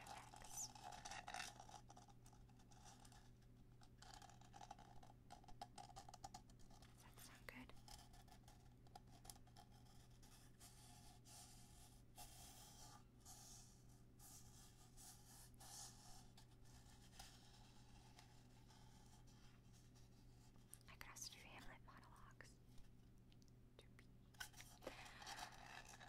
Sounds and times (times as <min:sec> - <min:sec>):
Inside, small room: 0:00.0 - 0:26.0.